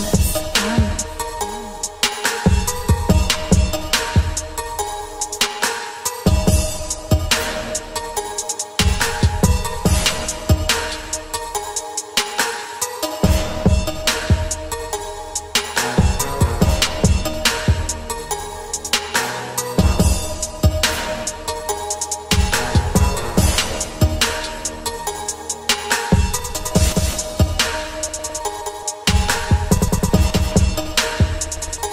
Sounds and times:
Hip hop music: 0:00.0 - 0:31.9.

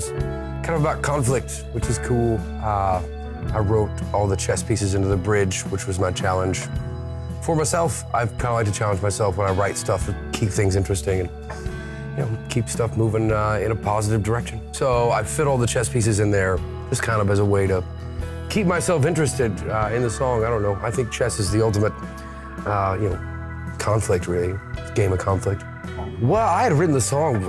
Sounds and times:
Speech: 0:00.0 - 0:06.7, 0:07.4 - 0:11.3, 0:12.2 - 0:17.8, 0:18.5 - 0:22.0, 0:22.6 - 0:23.2, 0:23.8 - 0:25.6, 0:26.2 - 0:27.4
Music: 0:00.0 - 0:27.4.

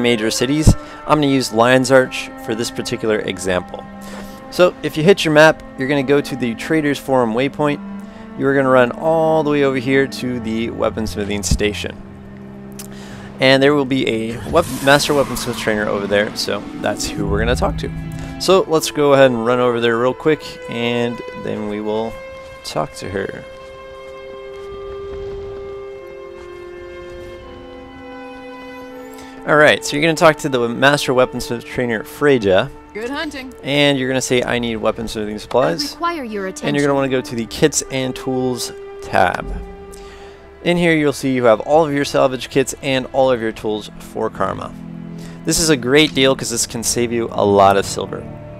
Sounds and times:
Speech: 0:00.0 - 0:03.8, 0:04.5 - 0:07.8, 0:08.4 - 0:12.0, 0:13.4 - 0:23.5, 0:29.5 - 0:39.6, 0:40.6 - 0:44.7, 0:45.5 - 0:48.2
Music: 0:00.0 - 0:48.5.

